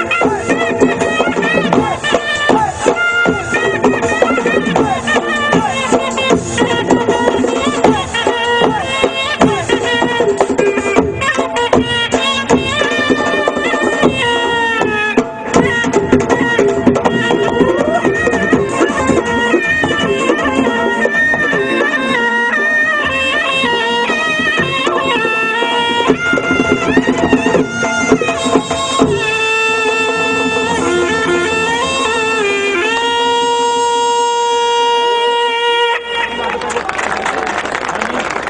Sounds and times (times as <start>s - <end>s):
Music: 0.0s - 38.5s.